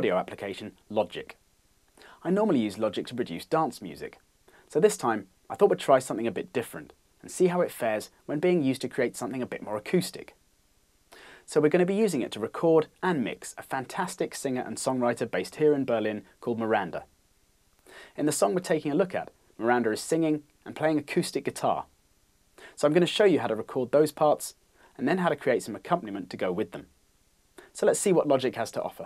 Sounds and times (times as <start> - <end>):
Speech: 0.0 - 1.4, 2.2 - 10.4, 11.5 - 17.1, 18.2 - 21.9, 22.8 - 26.9, 27.7 - 29.0.